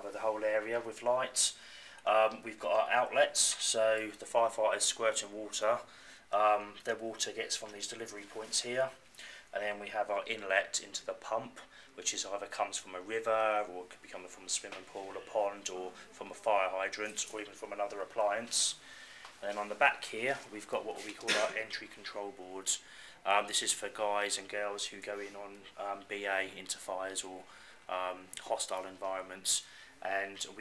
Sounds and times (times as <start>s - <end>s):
Speech: 0.0s - 18.8s, 19.4s - 30.6s.